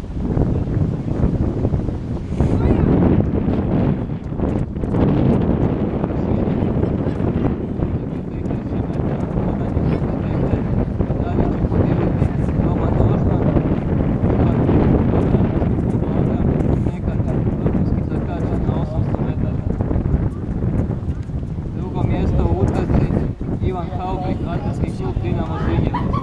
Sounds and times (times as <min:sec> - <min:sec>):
Outside, urban or manmade: 0:00.0 - 0:26.2
Speech: 0:02.4 - 0:03.0, 0:06.2 - 0:13.8, 0:14.4 - 0:19.8, 0:21.8 - 0:26.1.